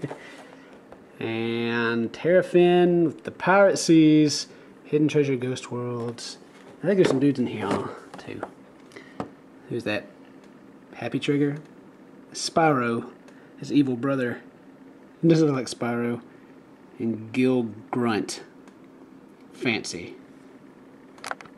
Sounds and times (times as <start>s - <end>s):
Speech: 1.2s - 8.6s, 9.7s - 10.2s, 10.9s - 11.7s, 12.3s - 14.5s, 15.2s - 16.3s, 17.0s - 18.6s, 19.6s - 20.2s.